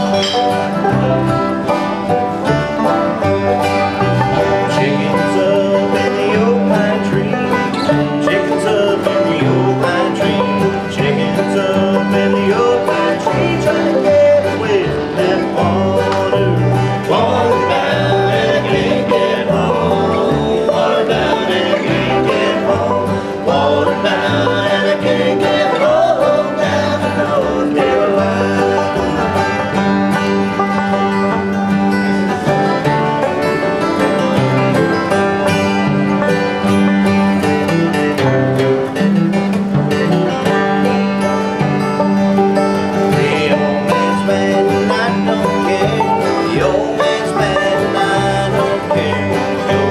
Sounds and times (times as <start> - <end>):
Banjo: 0.0 - 49.9
Country: 0.0 - 49.9.